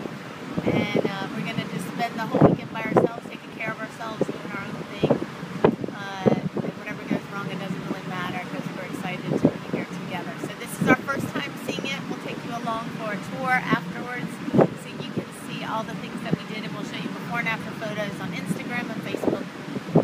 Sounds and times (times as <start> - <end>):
Speech: 0.6 - 5.2, 6.0 - 19.5.